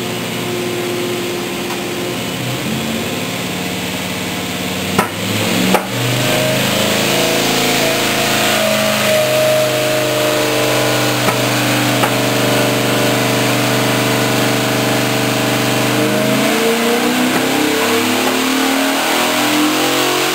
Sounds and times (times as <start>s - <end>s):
Vehicle: 0.0s - 20.3s
Accelerating, revving, vroom: 4.8s - 20.3s.